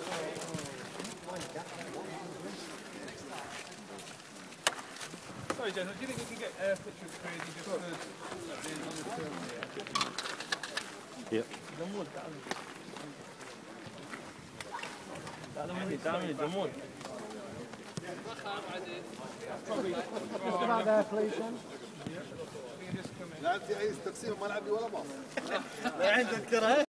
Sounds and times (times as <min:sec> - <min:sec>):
Walk, footsteps: 0:00.0 - 0:15.6, 0:16.9 - 0:19.4.